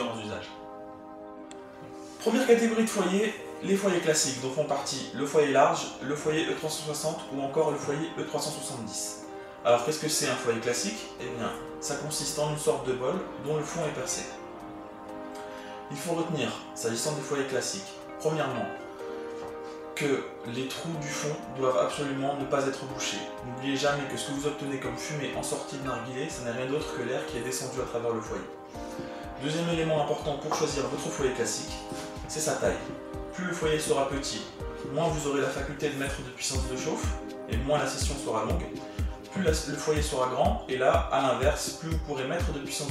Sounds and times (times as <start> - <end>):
Speech: 0.0 - 0.6, 2.2 - 14.4, 15.9 - 18.8, 20.0 - 28.6, 29.4 - 42.9
Music: 0.0 - 42.9.